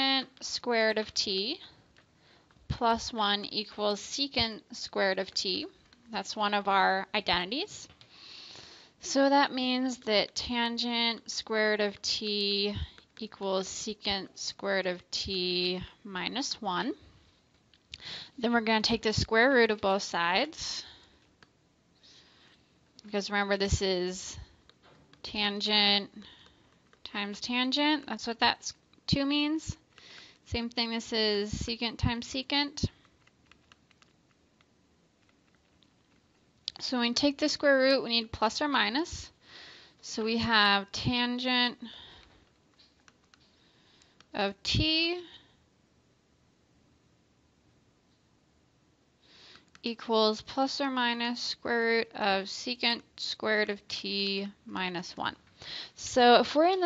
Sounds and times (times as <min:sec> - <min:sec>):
Speech: 0:00.0 - 0:01.7, 0:02.7 - 0:07.9, 0:09.0 - 0:17.0, 0:18.4 - 0:21.0, 0:23.0 - 0:24.5, 0:25.2 - 0:26.3, 0:27.0 - 0:29.8, 0:30.5 - 0:33.0, 0:36.7 - 0:39.4, 0:40.0 - 0:42.0, 0:44.4 - 0:45.4, 0:49.9 - 0:55.4, 0:56.0 - 0:56.8.